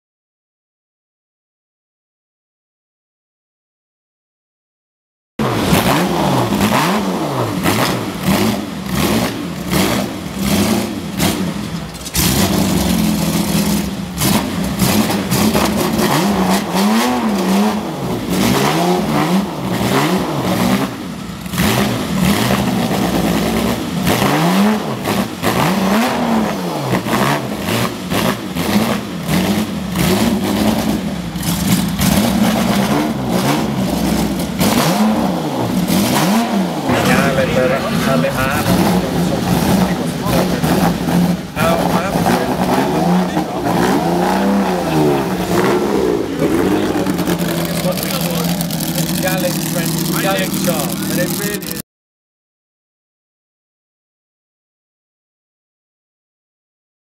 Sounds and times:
Speech: 36.9 - 40.8, 41.6 - 43.9, 46.6 - 51.9.

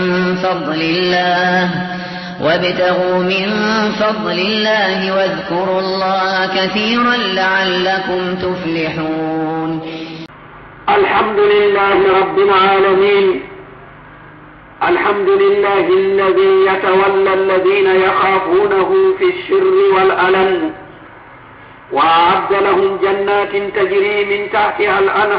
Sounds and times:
Speech: 10.9 - 13.6, 14.8 - 20.9, 21.9 - 25.3.

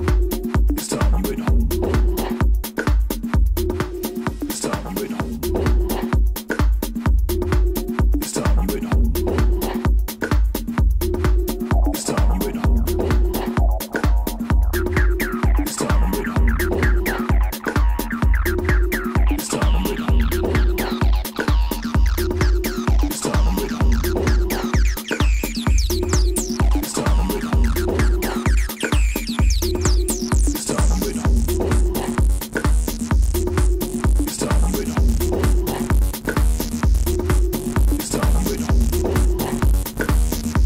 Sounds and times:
Electronic music: 0.0 - 40.6.

